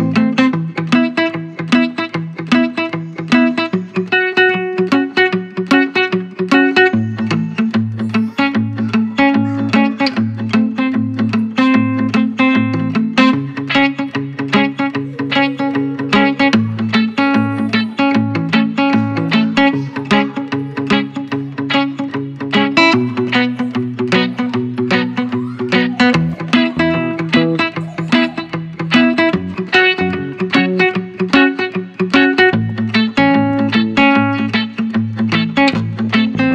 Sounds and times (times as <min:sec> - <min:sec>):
Music: 0:00.0 - 0:36.5.